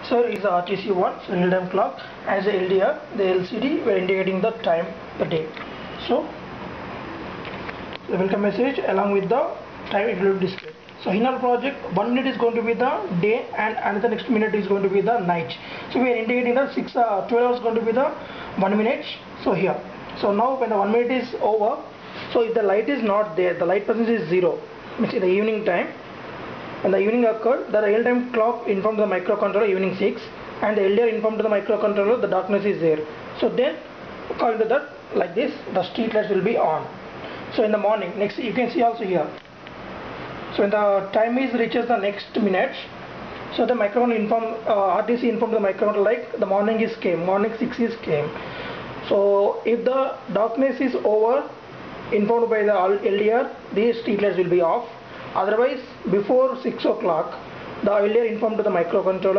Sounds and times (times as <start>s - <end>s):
Speech: 0.0s - 6.4s, 8.1s - 26.0s, 26.8s - 39.4s, 40.5s - 48.4s, 49.0s - 59.3s.